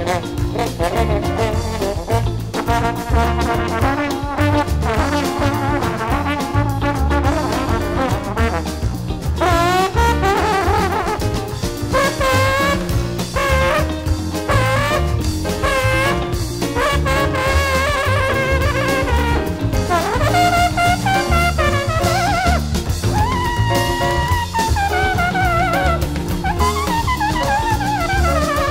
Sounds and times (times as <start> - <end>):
Trombone: 0.0 - 28.7.